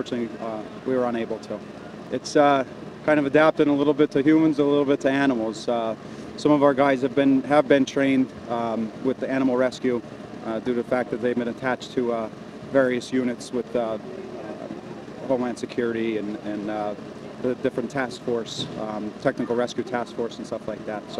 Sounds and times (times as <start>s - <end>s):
Speech: 0.0s - 21.1s.